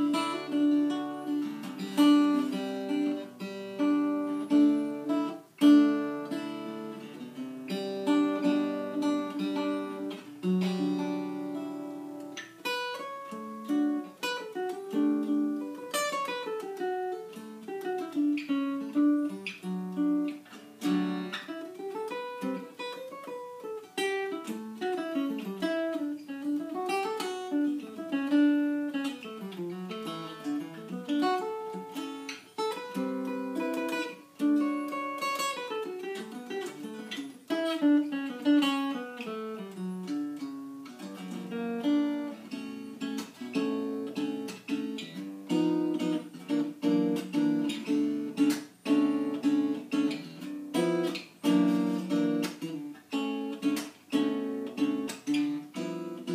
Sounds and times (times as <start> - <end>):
Acoustic guitar: 0.0 - 56.3.